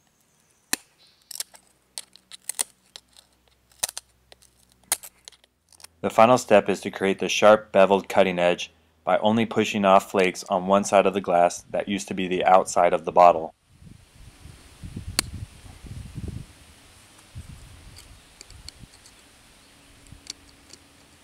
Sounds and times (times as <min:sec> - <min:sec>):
Speech: 0:06.1 - 0:13.5.